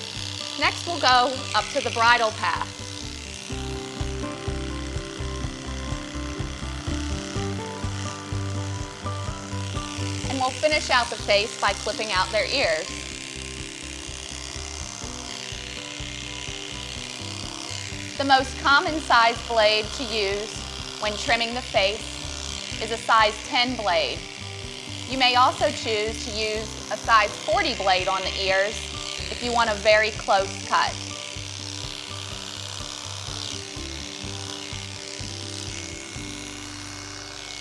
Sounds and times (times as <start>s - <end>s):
Music: 0.0s - 37.6s
Speech: 0.6s - 2.7s, 10.3s - 12.9s, 18.2s - 22.0s, 22.8s - 24.2s, 25.1s - 28.8s, 29.4s - 31.0s.